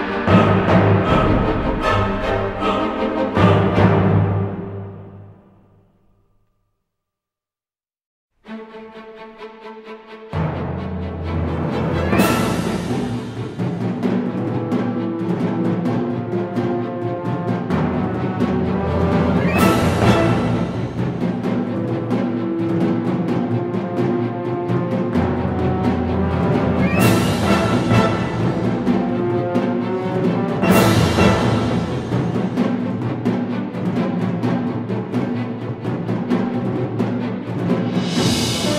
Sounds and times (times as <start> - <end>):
Drum roll: 0.0 - 5.0, 10.4 - 38.7.